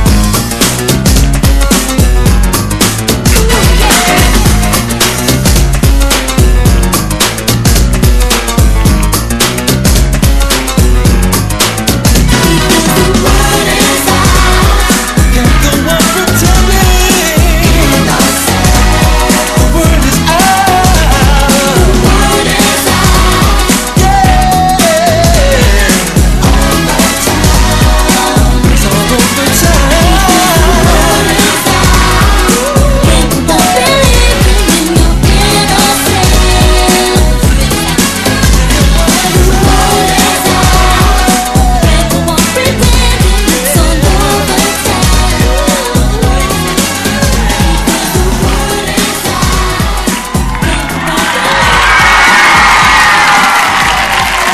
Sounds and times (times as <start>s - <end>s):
Inside, public space: 0.0s - 54.5s
Pop music: 0.0s - 54.5s
Singing: 3.3s - 5.4s, 12.1s - 54.5s.